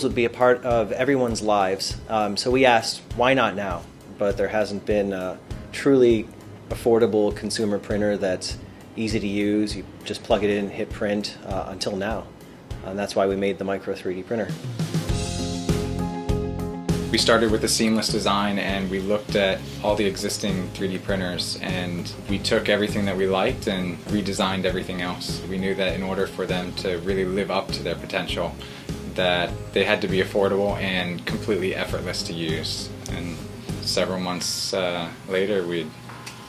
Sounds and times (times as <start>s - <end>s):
Speech: 0.0s - 14.6s, 17.1s - 36.0s
Music: 0.0s - 36.4s.